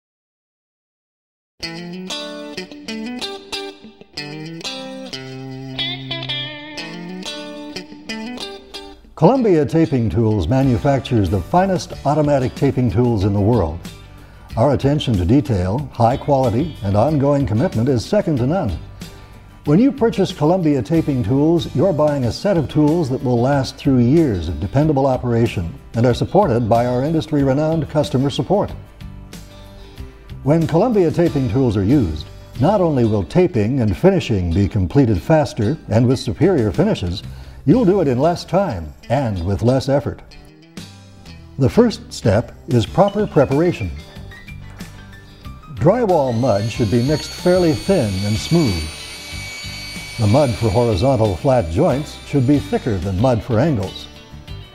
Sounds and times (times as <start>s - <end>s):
Music: 1.6s - 54.7s
Speech: 9.2s - 13.9s, 14.6s - 18.8s, 19.7s - 28.8s, 30.5s - 40.3s, 41.6s - 44.1s, 45.7s - 48.9s, 50.2s - 54.1s.